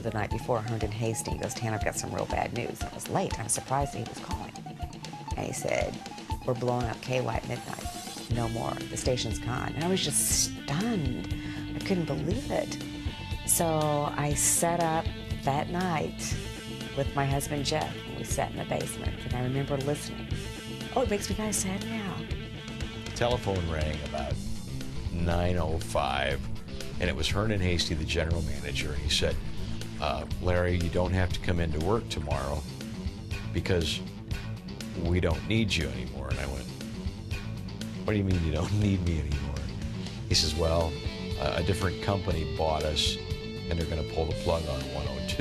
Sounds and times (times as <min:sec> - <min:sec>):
Speech: 0:00.0 - 0:04.5, 0:05.4 - 0:05.9, 0:06.5 - 0:12.8, 0:13.5 - 0:16.4, 0:17.0 - 0:20.2, 0:21.0 - 0:22.2, 0:23.2 - 0:24.4, 0:25.1 - 0:26.4, 0:27.0 - 0:29.4, 0:30.0 - 0:32.6, 0:33.6 - 0:34.0, 0:35.0 - 0:36.7, 0:38.1 - 0:39.7, 0:40.3 - 0:45.4.